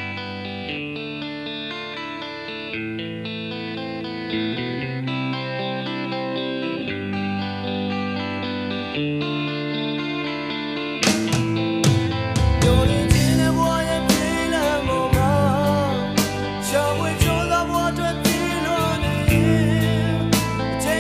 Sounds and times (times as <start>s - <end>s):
Music: 0.0s - 21.0s.